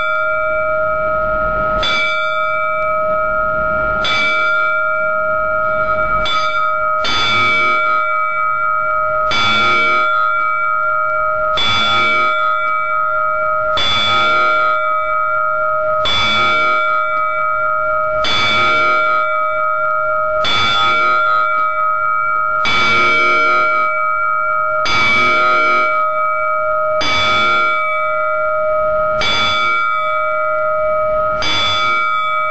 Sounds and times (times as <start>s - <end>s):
Bell: 0.0s - 32.5s.